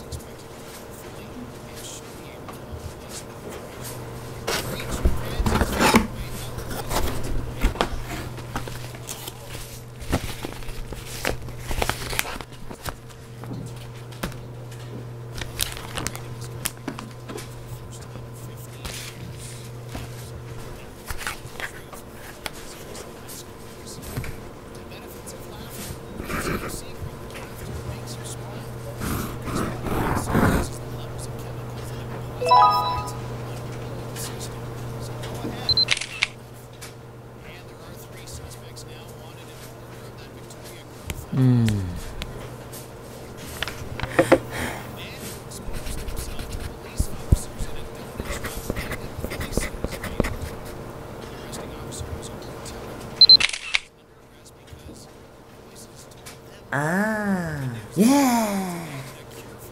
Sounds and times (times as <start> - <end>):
Speech: 0.0 - 8.2, 17.5 - 35.8, 37.4 - 42.1, 44.8 - 53.0, 53.9 - 59.7.